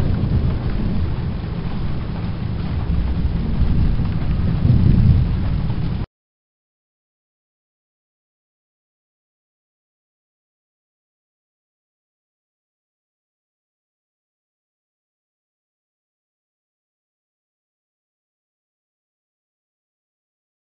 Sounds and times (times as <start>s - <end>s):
Rain: 0.0s - 6.1s
Thunder: 0.0s - 6.1s.